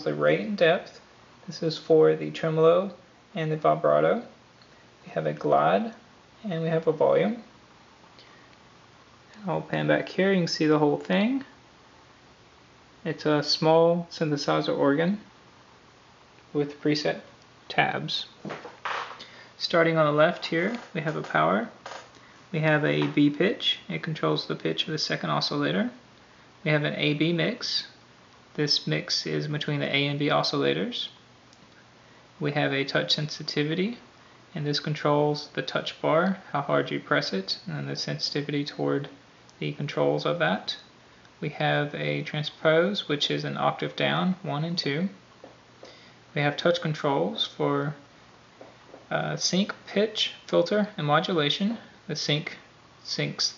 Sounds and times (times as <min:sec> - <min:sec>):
Speech: 0:00.0 - 0:04.4, 0:05.0 - 0:07.5, 0:09.4 - 0:11.6, 0:13.0 - 0:15.3, 0:16.5 - 0:18.4, 0:19.6 - 0:26.0, 0:26.6 - 0:28.0, 0:28.6 - 0:31.2, 0:32.4 - 0:45.2, 0:46.4 - 0:48.1, 0:49.1 - 0:53.5.